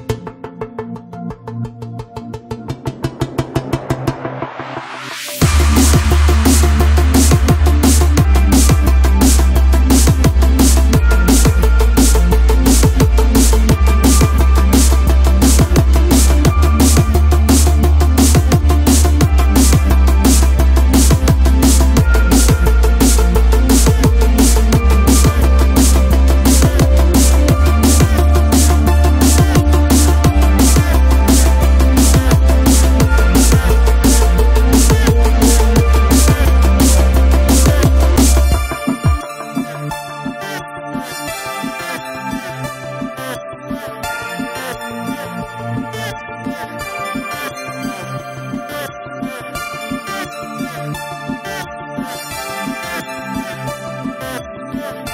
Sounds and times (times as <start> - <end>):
Music: 0.0 - 55.1.